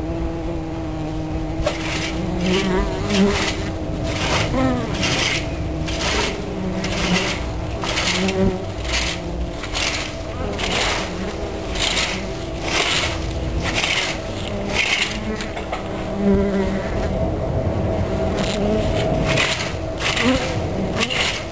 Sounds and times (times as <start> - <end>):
Buzz: 0.0 - 21.5.